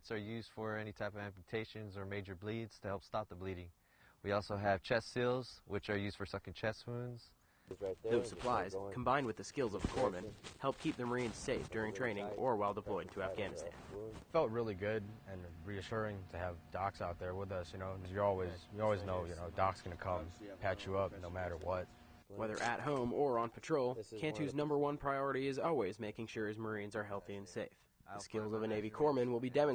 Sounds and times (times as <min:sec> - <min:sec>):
Speech: 0:00.0 - 0:29.7.